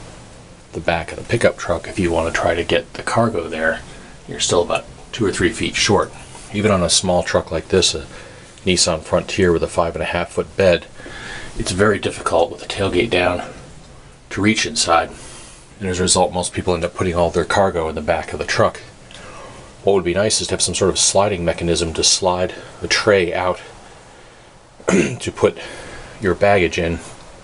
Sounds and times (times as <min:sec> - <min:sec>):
Speech: 0:00.7 - 0:10.9, 0:11.6 - 0:13.6, 0:14.3 - 0:15.2, 0:15.8 - 0:19.0, 0:19.8 - 0:23.8, 0:24.9 - 0:27.2.